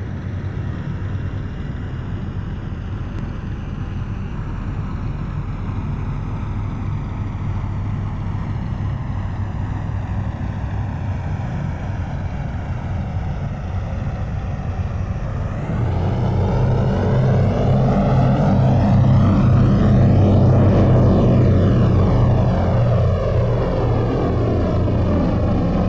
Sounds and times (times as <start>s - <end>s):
Fixed-wing aircraft, airplane: 0.0s - 25.8s.